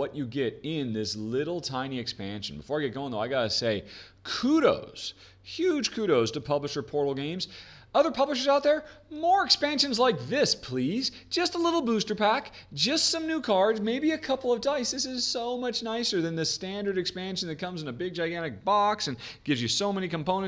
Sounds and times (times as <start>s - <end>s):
Inside, small room: 0.0s - 20.4s
Speech: 0.0s - 20.4s.